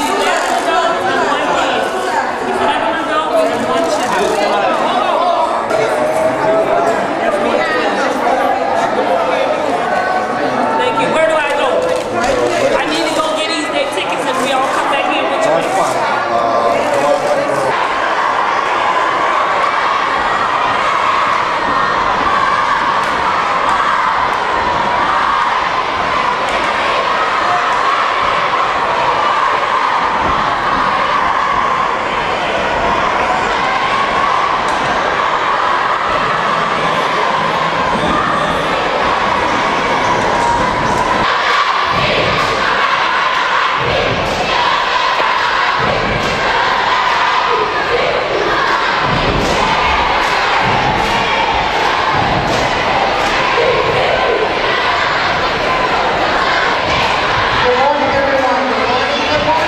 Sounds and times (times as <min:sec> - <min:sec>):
Speech: 0:00.0 - 0:17.8, 0:57.6 - 0:59.6.